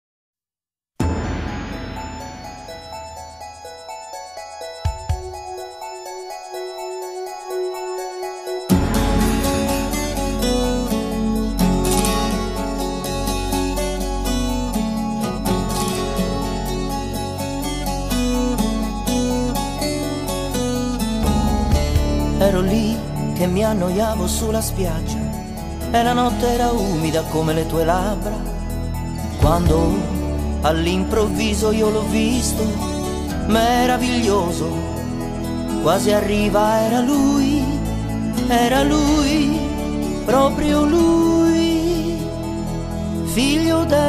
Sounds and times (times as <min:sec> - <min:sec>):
Music: 0:01.0 - 0:44.0.